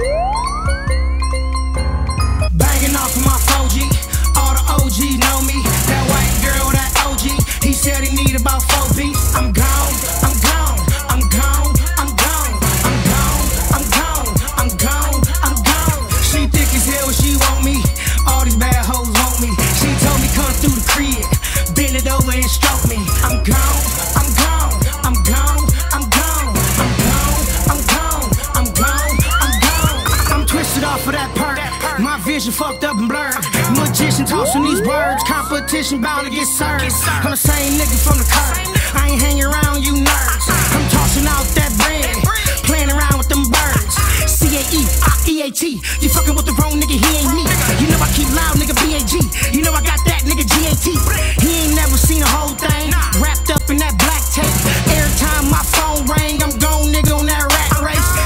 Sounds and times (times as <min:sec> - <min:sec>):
Rhythm and blues: 0:00.0 - 0:58.2.